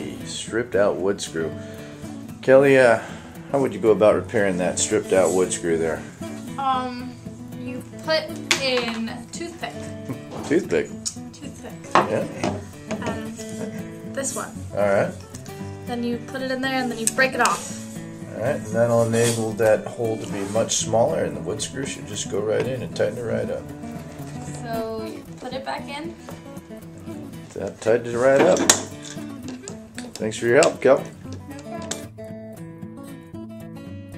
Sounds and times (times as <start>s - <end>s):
Music: 0.0s - 34.1s.